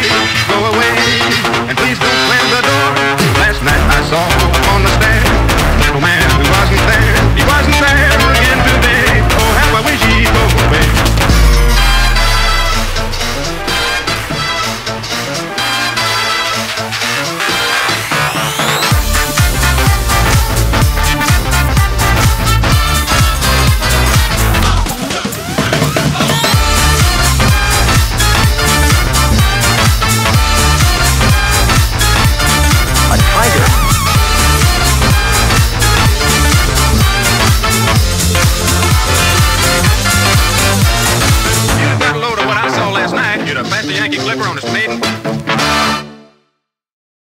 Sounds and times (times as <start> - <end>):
Music: 0.0 - 46.9.